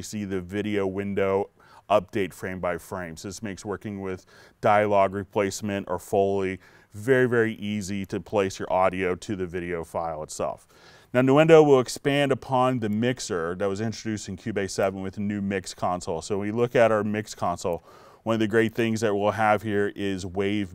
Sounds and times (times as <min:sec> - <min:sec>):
Speech: 0:00.0 - 0:20.7.